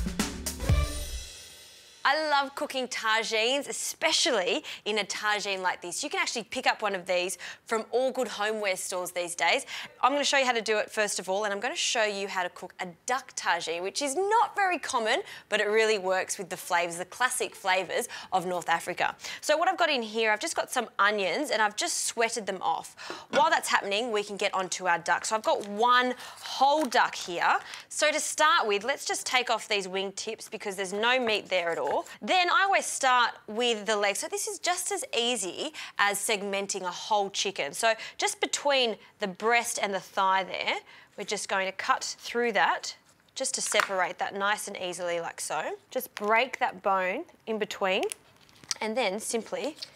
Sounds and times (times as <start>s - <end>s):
Speech: 2.1s - 48.2s, 48.8s - 49.9s.